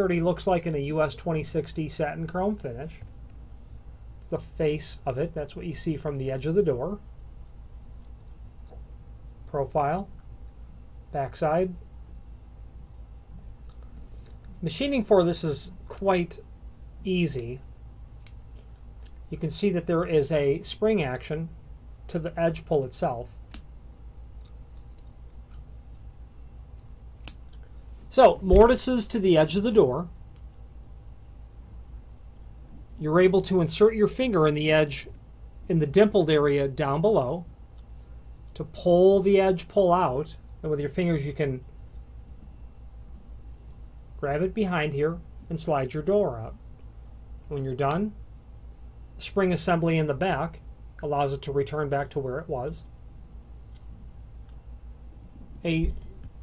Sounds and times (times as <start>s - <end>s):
Speech: 0.0s - 3.1s, 4.3s - 7.0s, 9.5s - 10.1s, 11.1s - 11.8s, 14.6s - 17.6s, 19.3s - 21.5s, 22.1s - 23.4s, 28.1s - 30.1s, 33.0s - 37.5s, 38.6s - 41.7s, 44.2s - 46.6s, 47.5s - 48.2s, 49.2s - 52.9s, 55.6s - 56.0s.